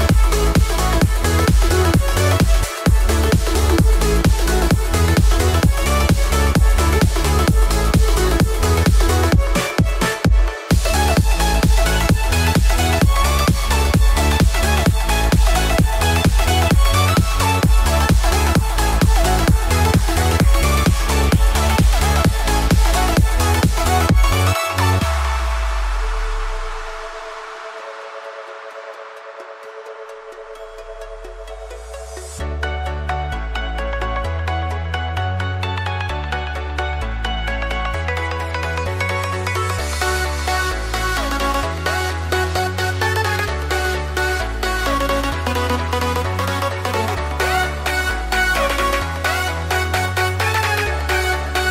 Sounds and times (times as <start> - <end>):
Music: 0.0 - 51.7.